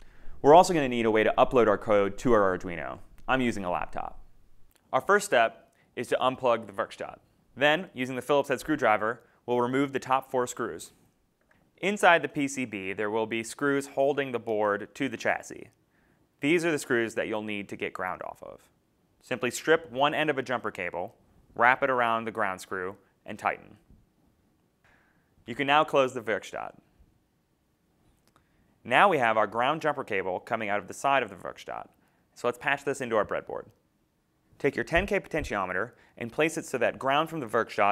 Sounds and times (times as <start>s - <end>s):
Speech: 0.4s - 4.3s, 4.9s - 11.0s, 11.8s - 15.8s, 16.4s - 23.8s, 25.5s - 26.9s, 28.8s - 33.8s, 34.6s - 37.9s.